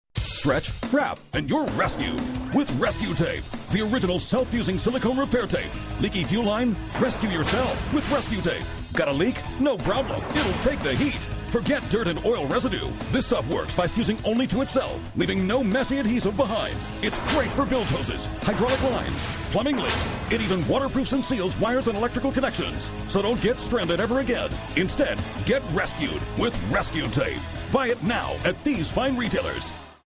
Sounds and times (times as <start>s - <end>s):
Music: 0.2s - 30.1s
Speech: 0.3s - 29.8s.